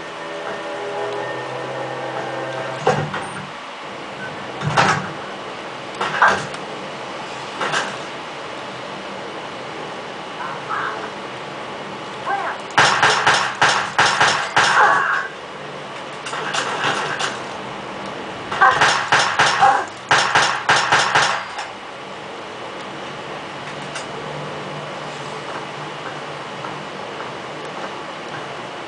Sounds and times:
Speech: 0:12.3 - 0:12.6.

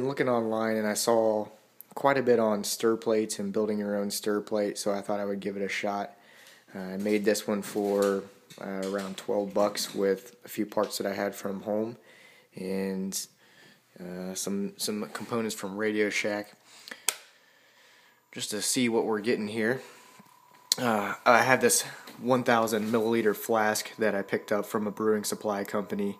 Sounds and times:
Speech: 0:00.0 - 0:12.0, 0:12.6 - 0:13.3, 0:14.0 - 0:16.6, 0:18.3 - 0:20.0, 0:20.7 - 0:26.2.

